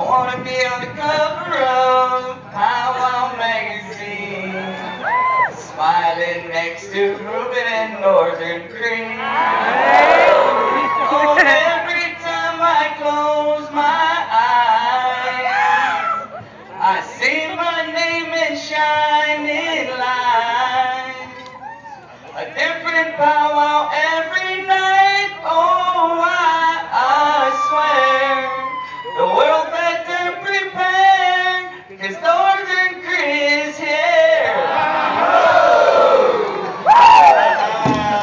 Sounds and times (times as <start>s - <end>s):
Crowd: 0.0s - 38.2s.